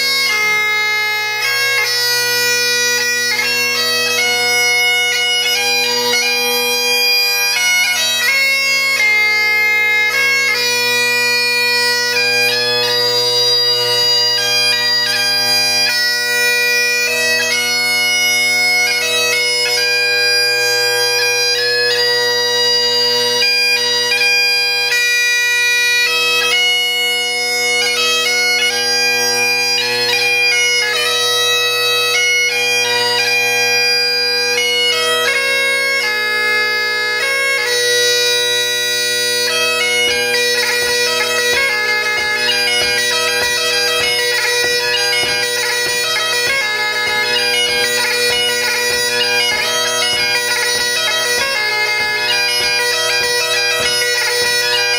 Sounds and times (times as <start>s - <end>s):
Bagpipes: 0.0s - 54.9s
Wind instrument, woodwind instrument: 0.0s - 54.9s.